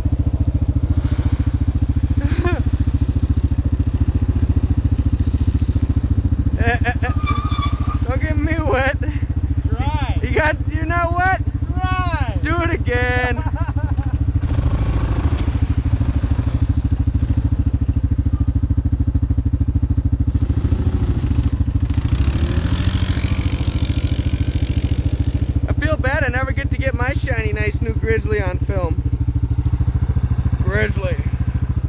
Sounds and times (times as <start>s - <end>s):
Speech: 9.7s - 13.4s, 25.7s - 29.0s, 30.6s - 31.3s.